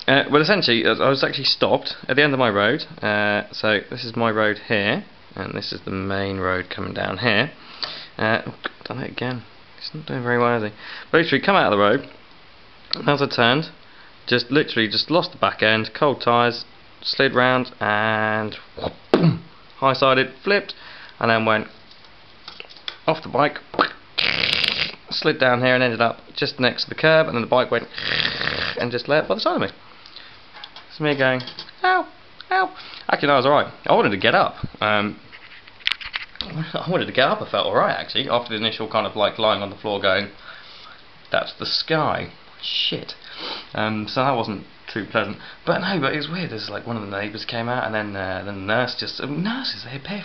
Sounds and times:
Inside, small room: 0:00.0 - 0:50.2
Speech: 0:00.1 - 0:07.6, 0:08.2 - 0:12.2, 0:12.9 - 0:21.8, 0:23.0 - 0:23.9, 0:25.1 - 0:27.9, 0:28.8 - 0:29.8, 0:30.9 - 0:35.2, 0:36.4 - 0:40.4, 0:41.3 - 0:50.2.

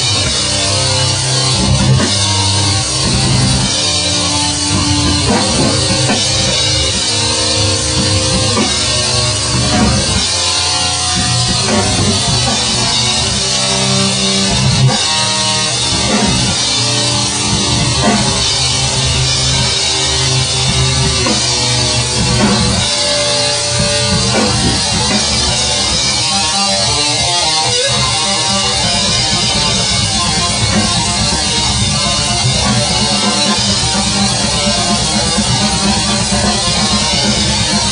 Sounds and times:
Heavy metal: 0:00.0 - 0:37.9.

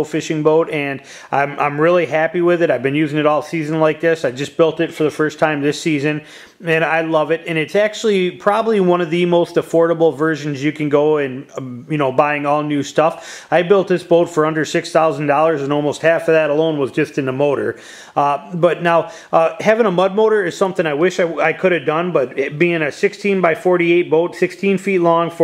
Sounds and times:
Speech: 0:00.0 - 0:25.4.

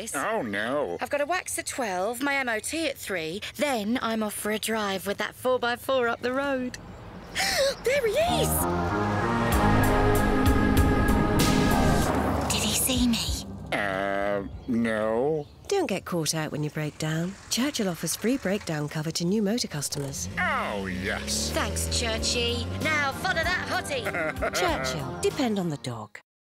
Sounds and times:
Car: 0:20.2 - 0:24.1.

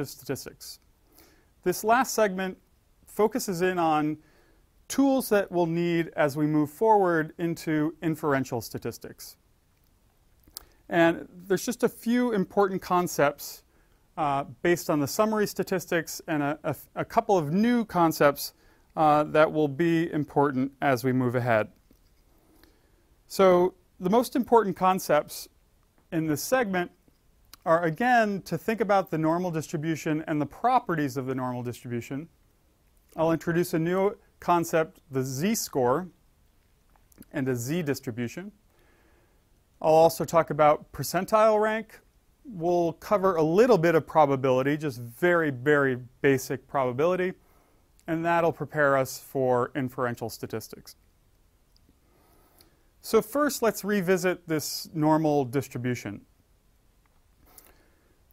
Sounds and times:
Speech: 0:00.0 - 0:00.9, 0:01.6 - 0:04.2, 0:04.9 - 0:09.4, 0:10.9 - 0:21.8, 0:23.3 - 0:27.0, 0:27.6 - 0:32.3, 0:33.2 - 0:36.2, 0:37.2 - 0:38.6, 0:39.8 - 0:47.4, 0:48.0 - 0:51.0, 0:53.0 - 0:56.3.

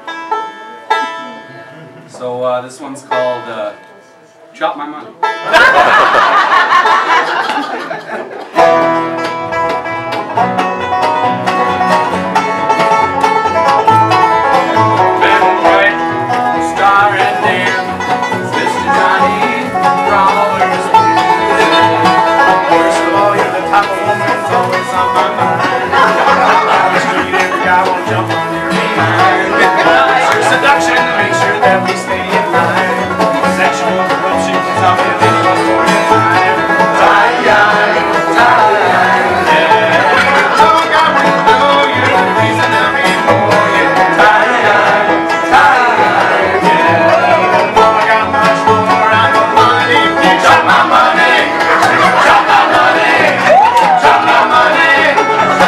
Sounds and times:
Music: 0:00.0 - 0:55.6.

